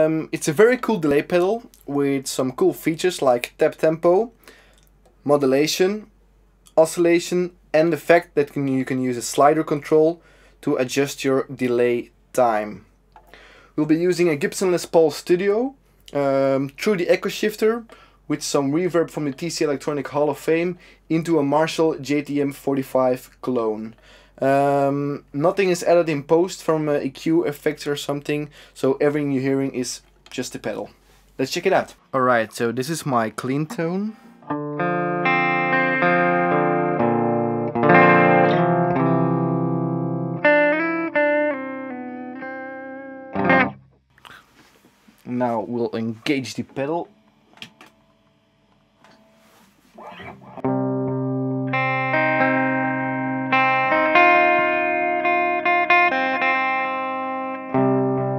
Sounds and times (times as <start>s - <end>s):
Speech: 0.0s - 4.4s, 5.2s - 6.1s, 6.7s - 12.9s, 13.8s - 34.2s, 45.2s - 47.1s
Music: 33.7s - 43.8s, 50.0s - 58.3s.